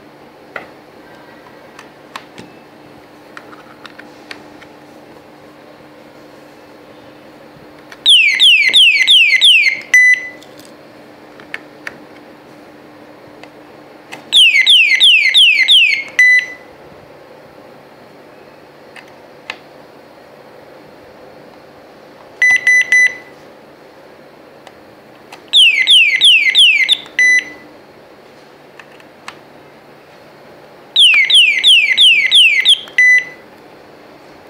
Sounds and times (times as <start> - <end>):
Alarm: 8.1 - 10.4, 14.3 - 16.7, 22.4 - 23.3, 25.6 - 27.6, 31.0 - 33.4.